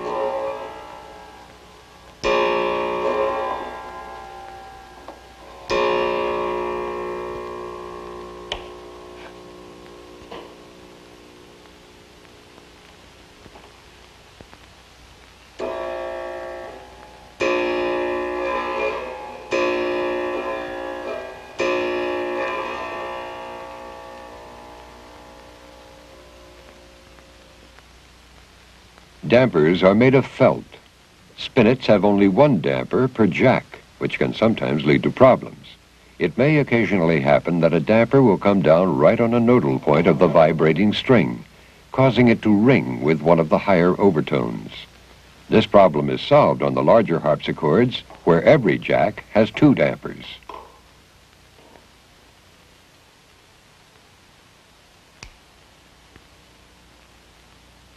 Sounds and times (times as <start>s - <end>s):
Speech: 29.2s - 44.9s, 45.5s - 50.5s.